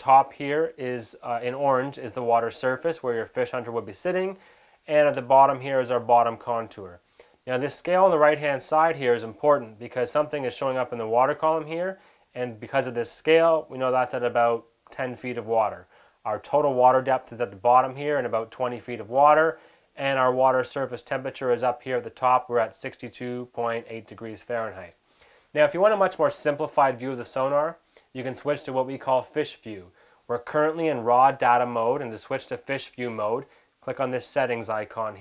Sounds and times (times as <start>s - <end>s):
Speech: 0.0s - 25.0s, 25.6s - 35.2s.